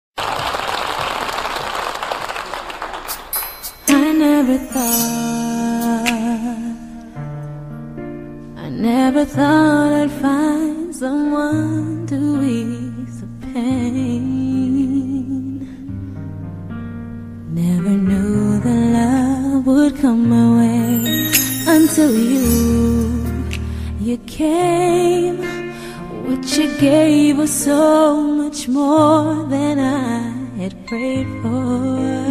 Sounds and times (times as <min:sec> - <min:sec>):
Music: 0:03.3 - 0:32.3.